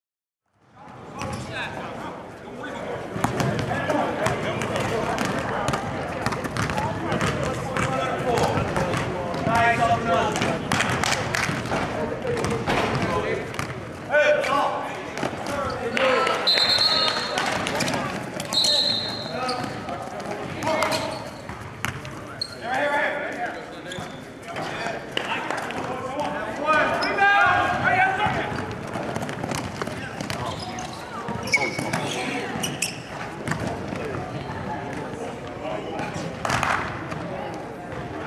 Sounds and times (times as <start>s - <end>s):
Inside, large room or hall: 0.5s - 38.2s
Speech: 0.7s - 21.4s, 22.0s - 29.2s, 29.8s - 38.2s
Basketball bounce: 3.2s - 9.7s, 19.5s - 22.1s, 27.7s - 30.6s, 31.3s - 32.1s, 33.4s - 34.2s.